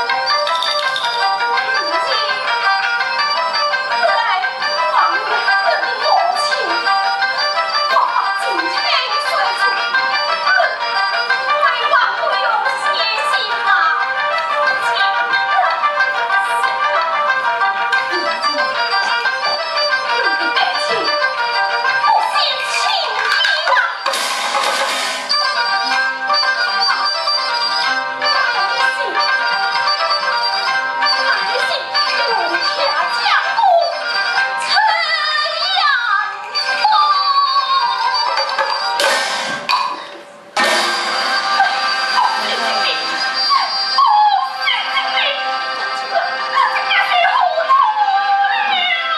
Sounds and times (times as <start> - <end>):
Music: 0.0 - 49.1.